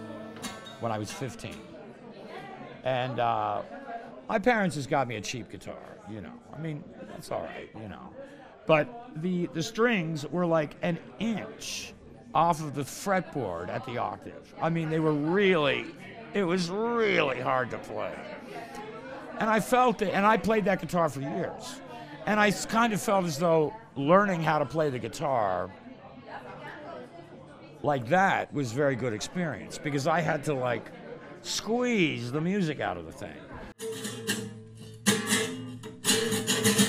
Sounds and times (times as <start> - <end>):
Crowd: 0.0 - 36.8.